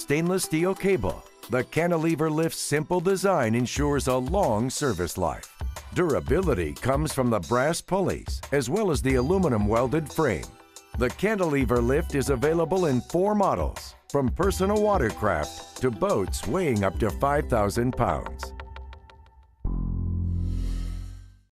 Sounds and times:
Speech: 0.0 - 18.5
Music: 0.0 - 21.5.

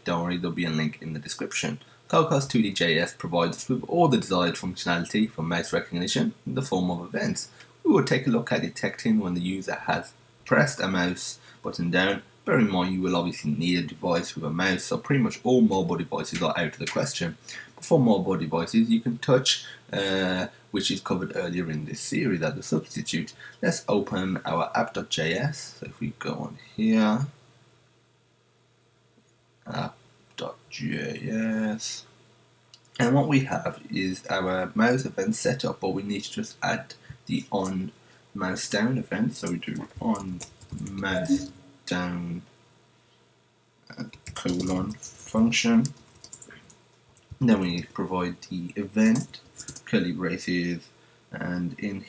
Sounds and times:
Speech: 0.0 - 27.4, 29.7 - 32.1, 32.9 - 42.5, 43.9 - 46.6, 47.4 - 52.0.

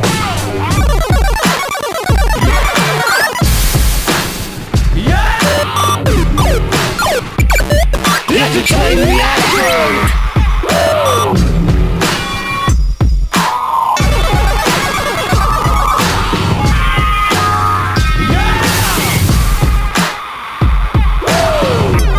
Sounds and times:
Music: 0.0 - 22.1.

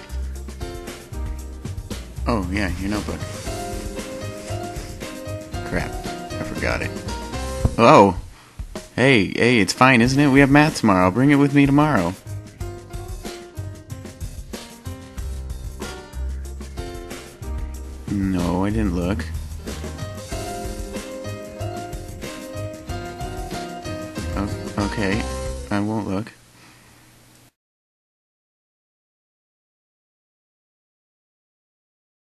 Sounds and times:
Funny music: 0.0 - 8.2, 8.8 - 25.9
Speech: 2.3 - 3.2, 7.8 - 8.2, 9.0 - 12.2, 18.1 - 19.3, 24.4 - 26.4.

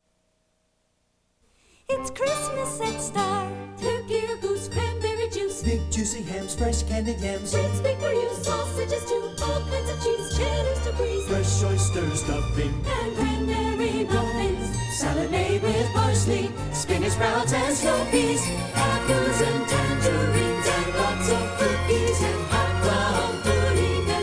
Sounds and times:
Jingle bell: 17.4 - 24.2.

